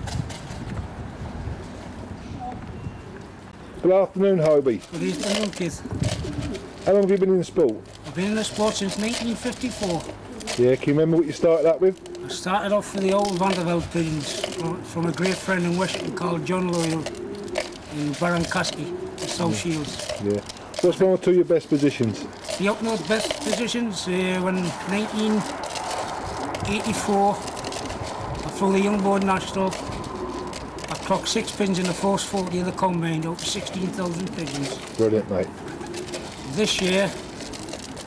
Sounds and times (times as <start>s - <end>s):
Coo: 4.9s - 6.9s, 8.4s - 10.7s, 12.0s - 20.9s, 22.1s - 38.0s.